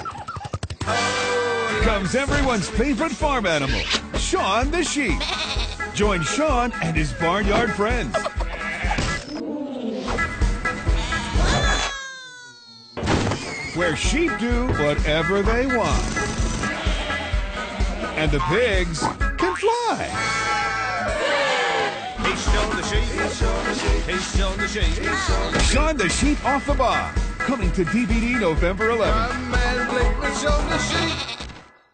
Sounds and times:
Music: 0.8s - 11.9s, 13.8s - 31.9s.

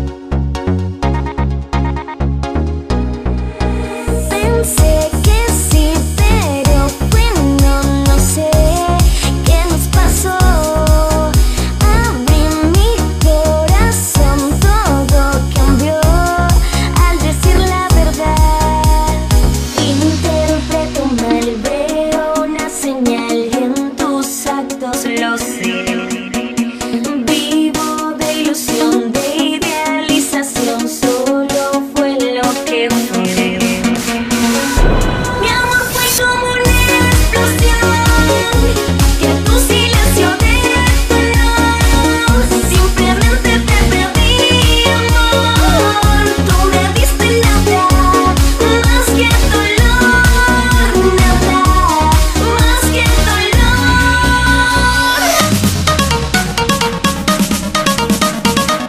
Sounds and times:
Music: 0.0s - 58.8s.

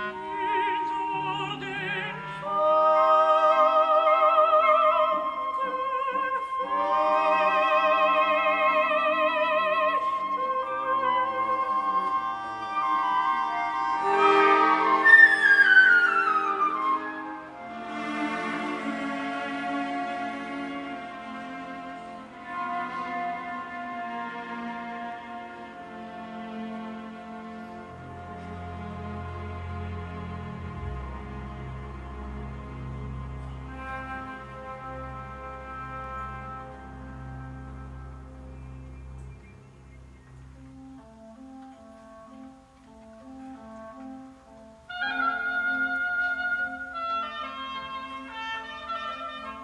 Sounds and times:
Orchestra: 0.0s - 49.6s.

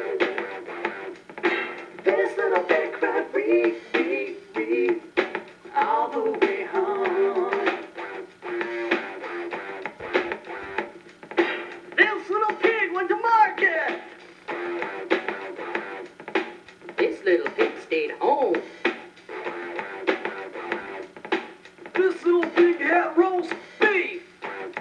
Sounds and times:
Music: 0.0s - 24.8s.

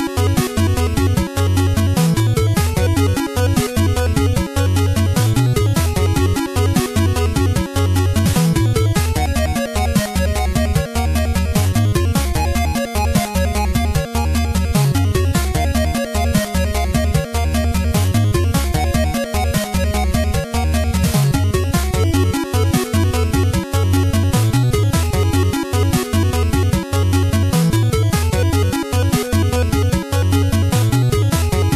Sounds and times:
Video game music: 0.0s - 31.7s.

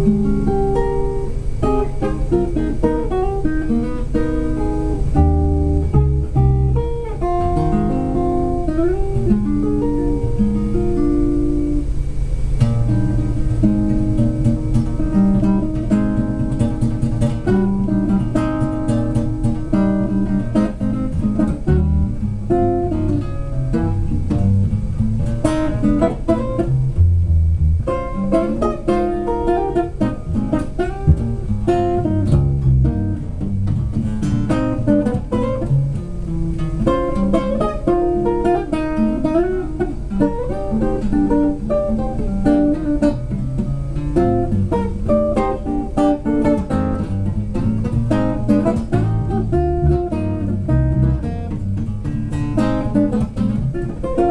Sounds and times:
Acoustic guitar: 0.0s - 54.3s
Jazz: 0.0s - 54.3s
Strum: 0.0s - 54.3s.

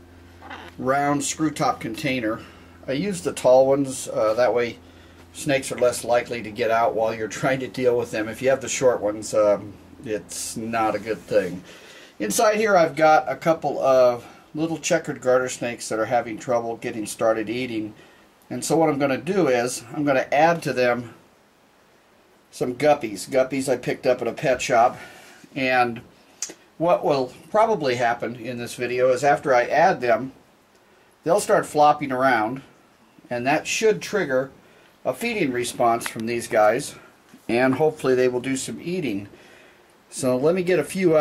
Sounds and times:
Inside, small room: 0.0s - 41.2s
Speech: 0.7s - 21.2s, 22.5s - 30.4s, 31.2s - 32.7s, 33.3s - 39.3s, 40.1s - 41.2s.

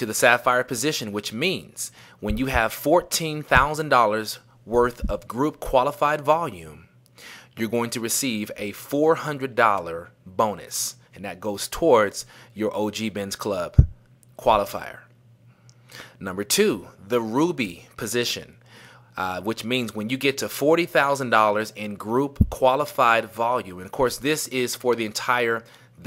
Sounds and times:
Speech: 0.0s - 6.9s, 7.6s - 15.1s, 16.2s - 18.6s, 19.2s - 26.0s.

